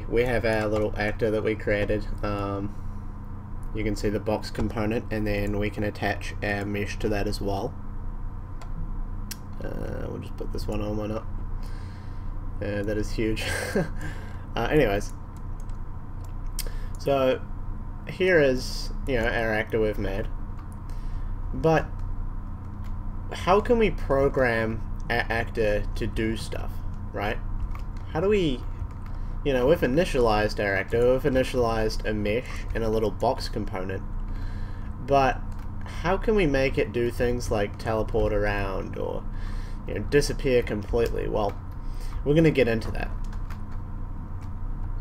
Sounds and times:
Speech: 0.0 - 2.7, 3.7 - 7.8, 9.5 - 11.3, 12.6 - 13.8, 14.6 - 15.1, 17.0 - 17.4, 18.1 - 20.3, 21.6 - 21.9, 23.3 - 27.4, 28.1 - 28.7, 29.5 - 34.1, 35.0 - 39.3, 39.9 - 41.6, 42.2 - 43.2.

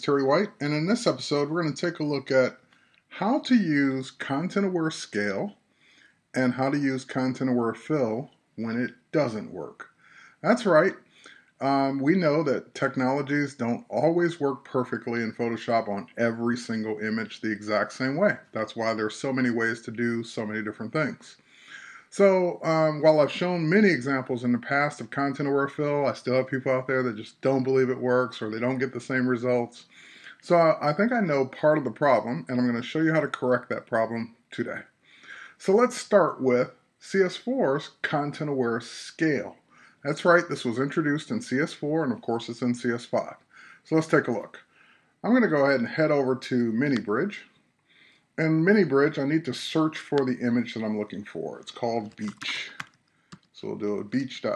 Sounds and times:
Speech: 0.0 - 2.6, 3.2 - 5.6, 6.4 - 47.5, 48.4 - 52.9, 53.6 - 54.5.

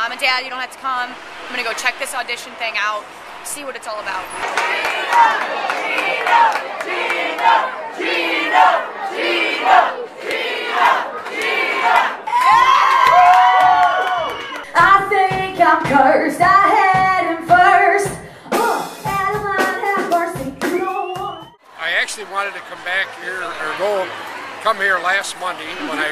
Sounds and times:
Female singing: 14.7 - 21.6
Music: 14.8 - 21.6
Speech: 21.8 - 24.1.

